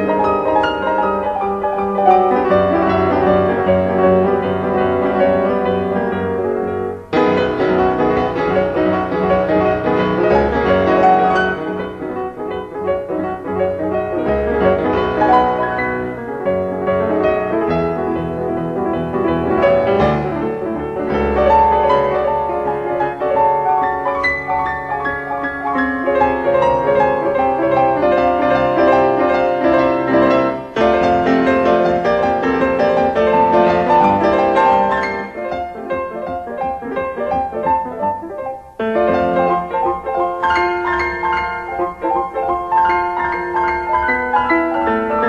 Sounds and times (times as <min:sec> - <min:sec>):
Music: 0:00.0 - 0:45.2.